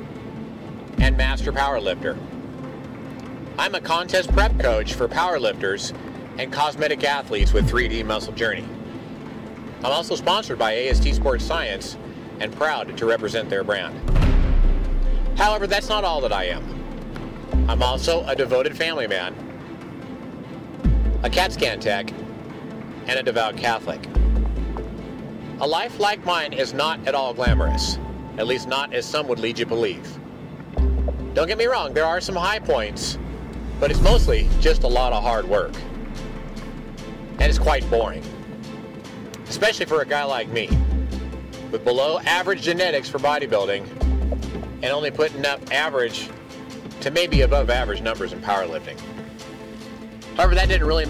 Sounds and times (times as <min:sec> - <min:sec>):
Music: 0:00.0 - 0:51.0
Speech: 0:01.0 - 0:02.2, 0:03.6 - 0:08.7, 0:09.8 - 0:14.0, 0:15.4 - 0:16.7, 0:17.7 - 0:19.4, 0:21.2 - 0:22.2, 0:23.0 - 0:24.1, 0:25.6 - 0:30.2, 0:31.4 - 0:33.2, 0:33.8 - 0:35.9, 0:37.4 - 0:38.3, 0:39.4 - 0:40.8, 0:41.7 - 0:43.9, 0:44.8 - 0:46.4, 0:47.0 - 0:49.0, 0:50.4 - 0:51.0.